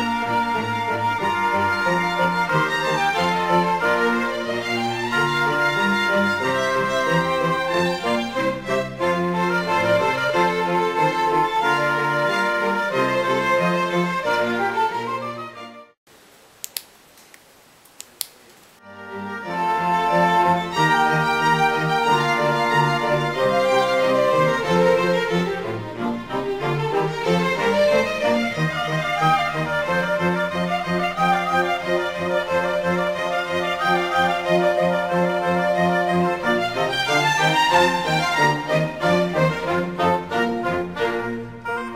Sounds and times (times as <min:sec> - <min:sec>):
Music: 0:00.0 - 0:16.0, 0:18.8 - 0:41.9.